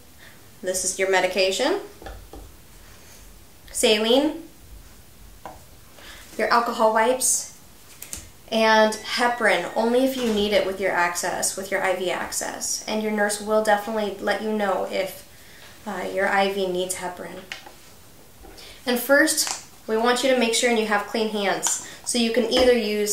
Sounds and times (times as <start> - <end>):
Speech: 0.6 - 1.9, 3.7 - 4.5, 6.4 - 7.6, 8.5 - 17.5, 18.8 - 23.1.